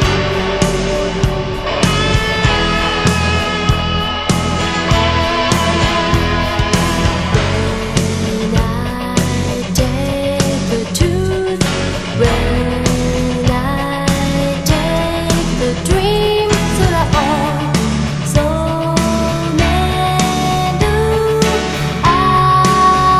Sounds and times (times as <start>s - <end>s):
Music: 0.0s - 23.2s.